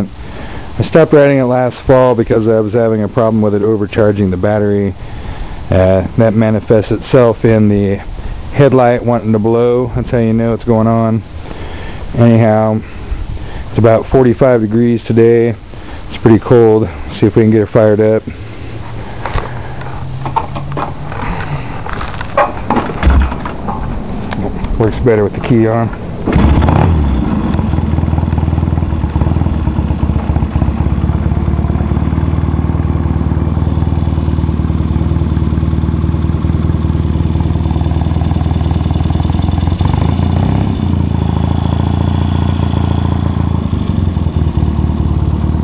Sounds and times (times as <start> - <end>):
Speech: 0.8 - 5.0, 5.7 - 11.2, 12.2 - 12.9, 13.8 - 18.4, 24.4 - 26.0.